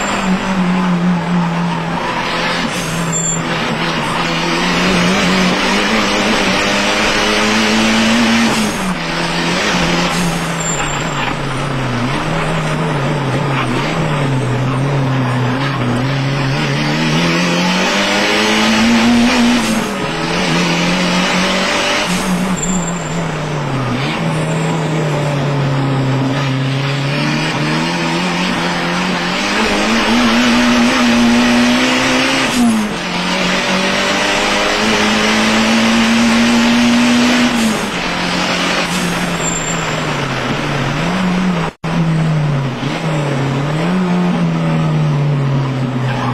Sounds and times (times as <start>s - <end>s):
Car: 0.0s - 46.3s.